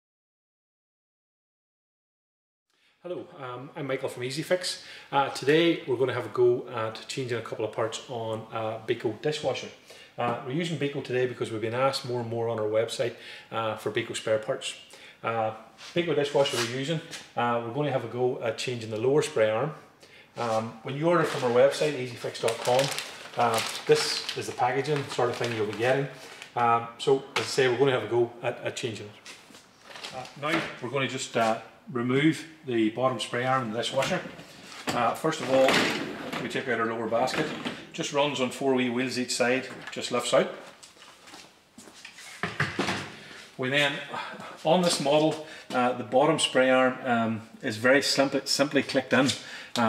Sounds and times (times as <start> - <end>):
Speech: 3.1 - 19.8, 20.4 - 29.2, 30.2 - 40.6, 43.6 - 49.8.